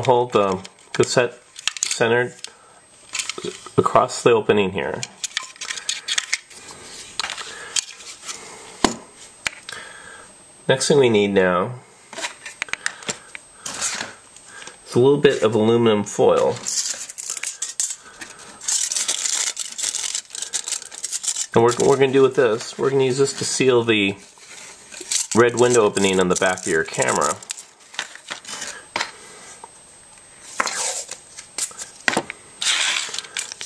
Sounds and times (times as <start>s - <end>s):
Speech: 0.0s - 2.4s, 3.8s - 5.1s, 10.7s - 11.8s, 14.9s - 16.7s, 21.5s - 24.2s, 25.3s - 27.4s
Inside, small room: 0.0s - 33.6s.